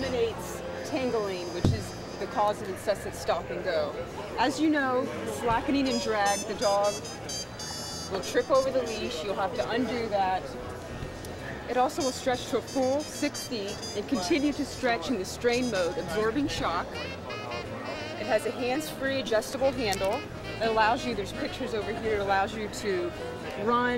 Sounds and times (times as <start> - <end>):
Speech: 0.0 - 7.0, 8.1 - 10.6, 11.5 - 23.9
Music: 0.0 - 23.9.